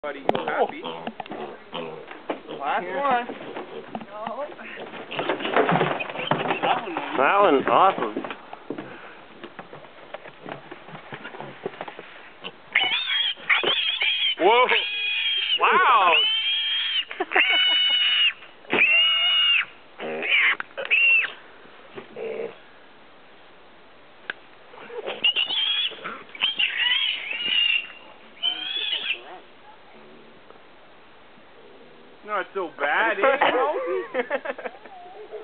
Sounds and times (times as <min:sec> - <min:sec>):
Pig: 0:00.2 - 0:02.8, 0:12.4 - 0:21.4, 0:24.8 - 0:29.4, 0:34.7 - 0:35.4.